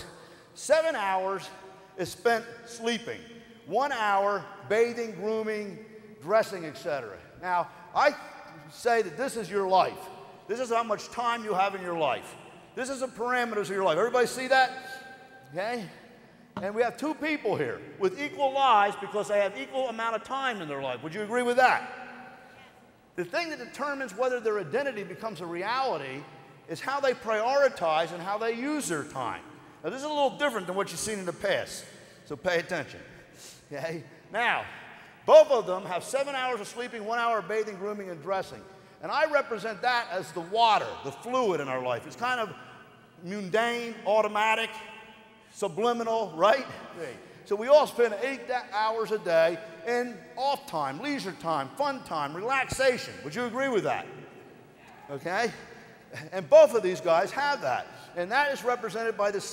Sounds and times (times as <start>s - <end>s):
Speech: 0.0s - 16.0s, 16.6s - 22.0s, 22.6s - 42.6s, 43.2s - 44.9s, 45.6s - 54.2s, 54.8s - 59.5s.